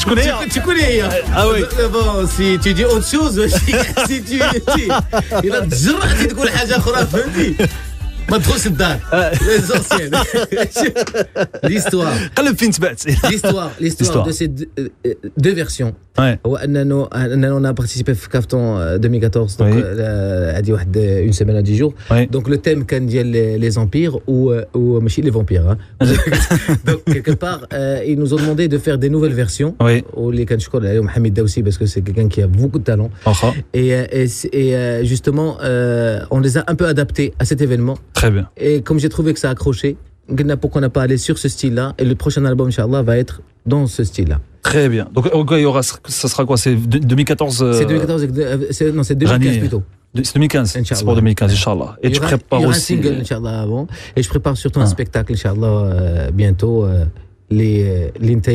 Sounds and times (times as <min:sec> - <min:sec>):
Speech: 0:00.0 - 0:07.7, 0:08.3 - 0:58.5.